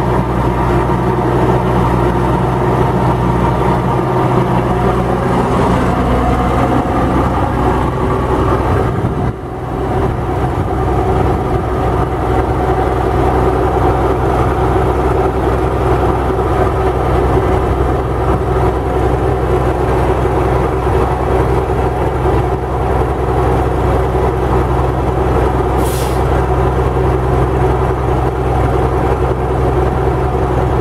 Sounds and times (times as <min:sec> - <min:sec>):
Truck: 0:00.0 - 0:30.8.